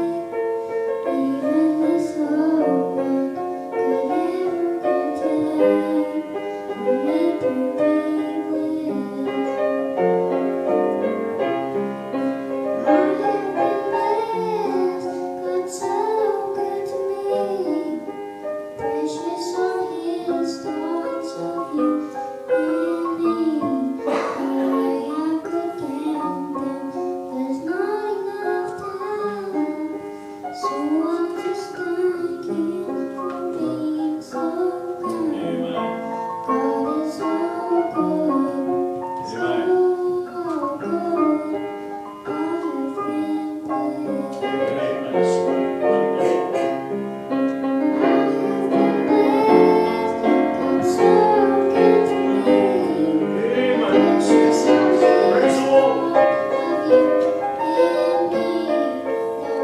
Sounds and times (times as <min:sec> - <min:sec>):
Child singing: 0:00.0 - 0:00.4, 0:01.0 - 0:09.7, 0:12.8 - 0:18.2, 0:18.8 - 0:46.8, 0:47.7 - 0:59.6
Music: 0:00.0 - 0:59.6
Female singing: 0:01.1 - 0:09.6, 0:12.8 - 0:18.0, 0:18.8 - 0:30.0, 0:30.6 - 0:35.6, 0:36.4 - 0:41.6, 0:42.3 - 0:45.5, 0:47.8 - 0:59.6.